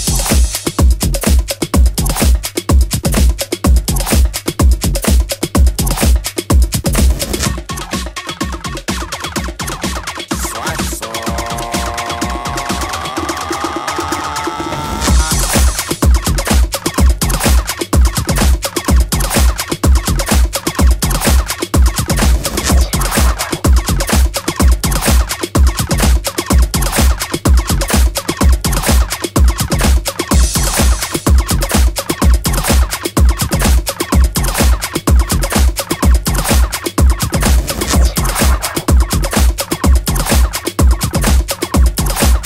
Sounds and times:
Disco: 0:00.0 - 0:42.4
House music: 0:00.0 - 0:42.4.

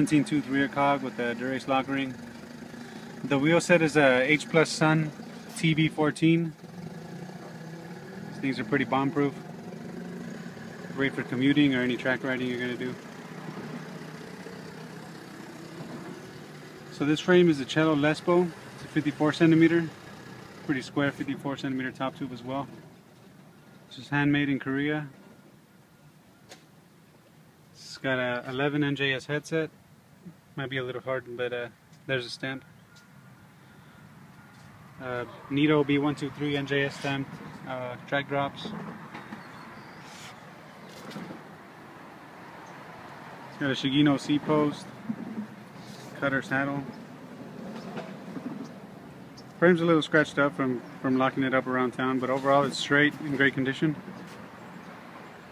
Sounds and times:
Speech: 0:00.0 - 0:02.2, 0:03.3 - 0:06.6, 0:08.4 - 0:09.4, 0:11.0 - 0:13.0, 0:16.9 - 0:19.9, 0:20.7 - 0:22.8, 0:23.9 - 0:25.2, 0:27.8 - 0:29.7, 0:30.6 - 0:32.6, 0:35.0 - 0:38.8, 0:43.6 - 0:45.0, 0:46.2 - 0:46.9, 0:49.6 - 0:54.0.

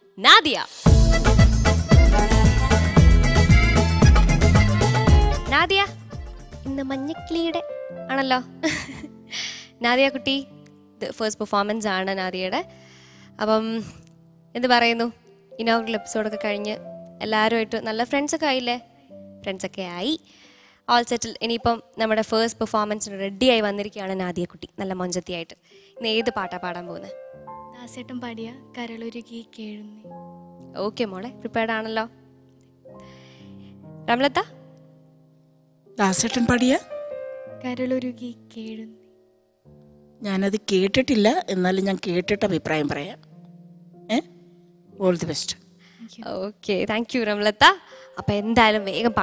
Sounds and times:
Music: 0:00.0 - 0:49.2.

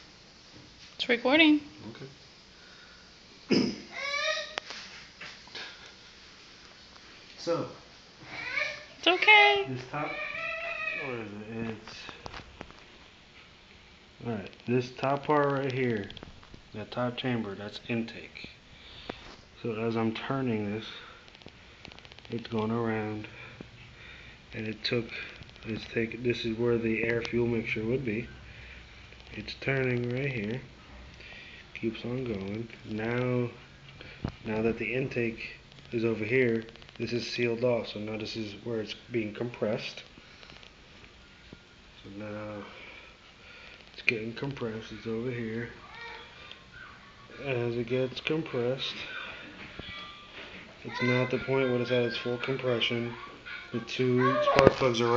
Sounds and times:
Crying, sobbing: 0:10.0 - 0:11.2, 0:50.9 - 0:55.1.

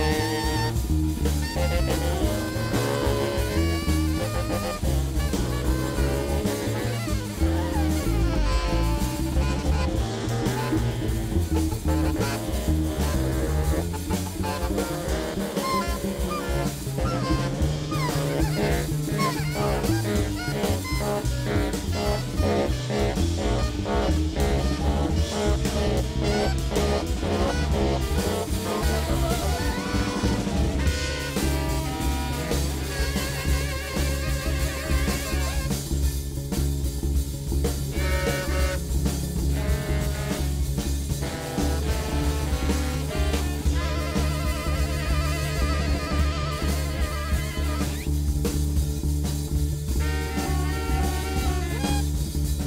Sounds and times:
Brass instrument: 0:00.0 - 0:52.6
Saxophone: 0:00.0 - 0:52.6.

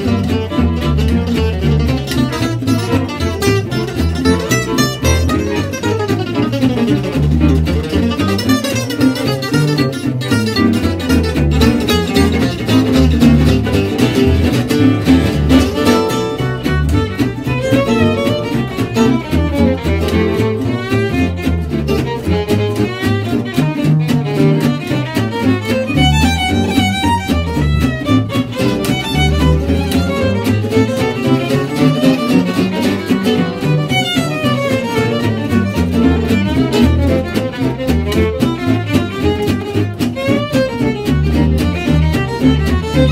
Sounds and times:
Acoustic guitar: 0:00.0 - 0:43.1
Flamenco: 0:00.0 - 0:43.1
Violin, fiddle: 0:00.0 - 0:43.1.

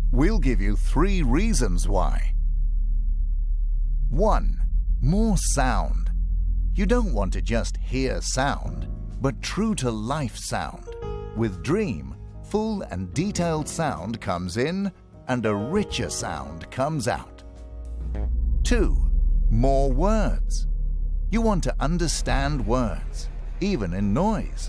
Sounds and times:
Speech: 0:00.1 - 0:02.3, 0:04.1 - 0:06.1, 0:06.8 - 0:17.4, 0:18.6 - 0:20.6, 0:21.3 - 0:24.6
Music: 0:06.8 - 0:24.6.

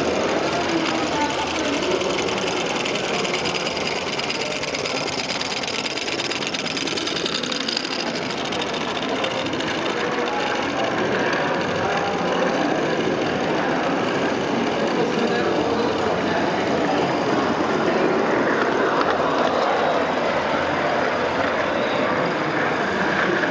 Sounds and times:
Speech: 0:00.0 - 0:23.5.

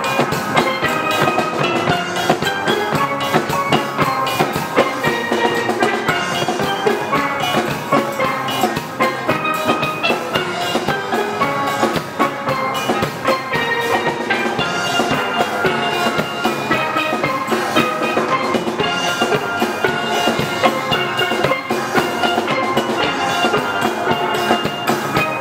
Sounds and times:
Steelpan: 0:00.0 - 0:25.4.

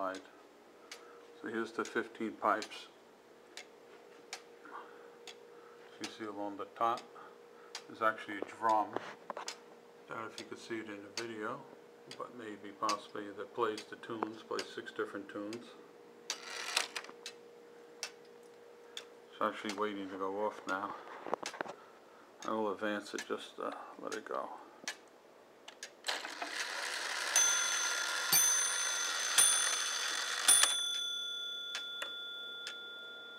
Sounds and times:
Speech: 0:00.0 - 0:00.4, 0:01.4 - 0:03.0, 0:05.9 - 0:07.1, 0:07.9 - 0:09.0, 0:10.1 - 0:15.8, 0:19.3 - 0:21.0, 0:22.4 - 0:24.7
Tick-tock: 0:02.6 - 0:02.8, 0:10.3 - 0:10.6, 0:11.2 - 0:11.4, 0:18.0 - 0:18.3, 0:23.2 - 0:23.4, 0:31.7 - 0:33.2.

